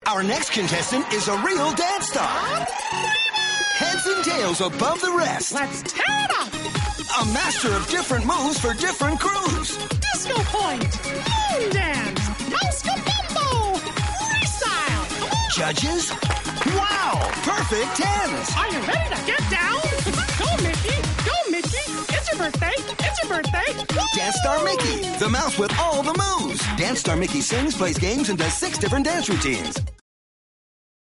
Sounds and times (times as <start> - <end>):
Music: 0.0 - 30.0
Speech: 16.8 - 29.8.